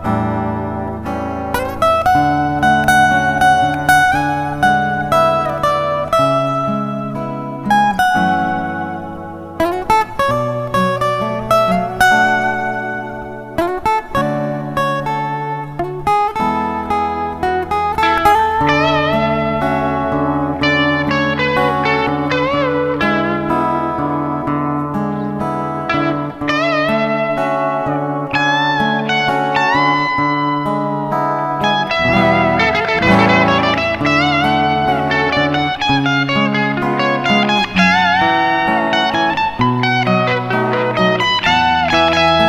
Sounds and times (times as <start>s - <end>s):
Steel guitar, slide guitar: 0.0s - 42.4s.